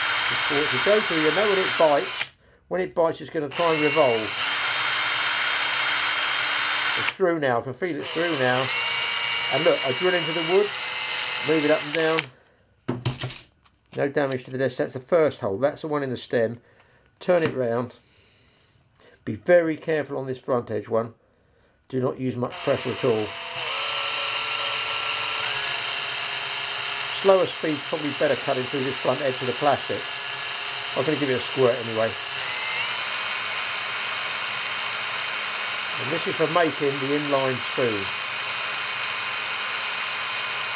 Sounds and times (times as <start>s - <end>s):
Drill: 0.0s - 2.4s, 3.5s - 7.2s, 8.0s - 12.3s, 22.5s - 40.7s.